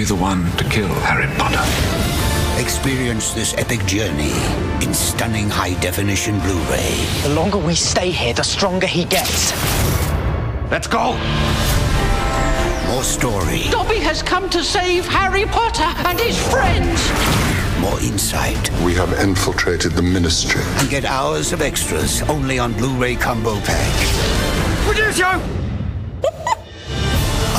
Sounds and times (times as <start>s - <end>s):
Music: 0.0s - 27.5s.